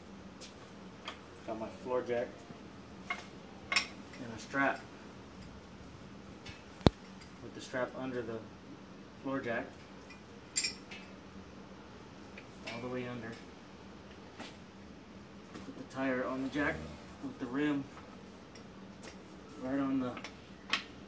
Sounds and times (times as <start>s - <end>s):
Speech: 1.5s - 2.4s, 4.2s - 4.8s, 7.4s - 8.5s, 9.2s - 9.7s, 12.7s - 13.4s, 15.7s - 17.9s, 19.6s - 20.3s.